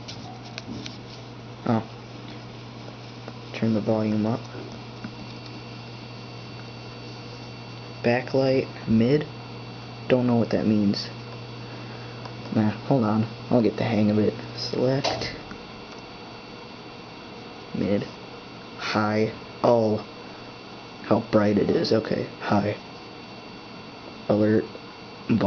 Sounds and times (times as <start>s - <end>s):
Speech: 1.6s - 1.9s, 3.5s - 4.6s, 8.0s - 9.4s, 10.1s - 11.2s, 12.5s - 15.4s, 17.7s - 18.2s, 18.8s - 20.1s, 21.0s - 22.8s, 24.3s - 25.4s.